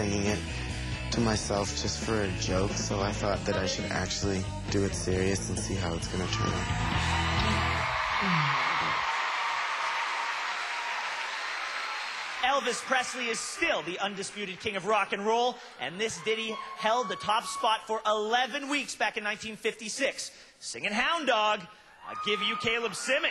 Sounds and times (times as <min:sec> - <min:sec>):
Speech: 0:00.0 - 0:00.5, 0:01.1 - 0:06.6, 0:12.4 - 0:23.3
Music: 0:00.0 - 0:08.0.